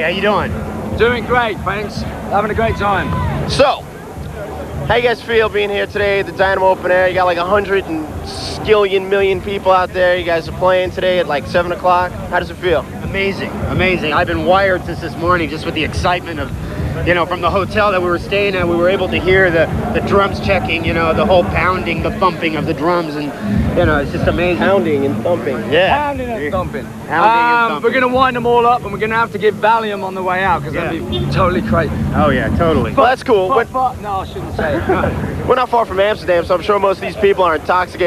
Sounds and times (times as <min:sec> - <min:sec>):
Music: 0:00.0 - 0:38.0
Speech: 0:04.8 - 0:38.0.